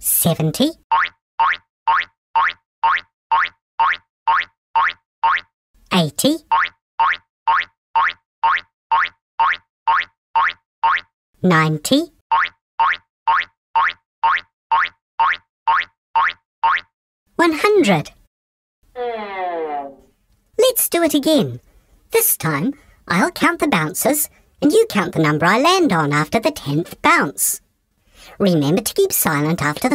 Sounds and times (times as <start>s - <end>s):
Speech: 0.0s - 0.8s, 5.9s - 6.5s, 11.4s - 12.2s, 17.4s - 18.2s, 20.6s - 27.6s, 28.4s - 29.9s
Boing: 0.9s - 5.5s, 6.5s - 11.1s, 12.3s - 17.0s.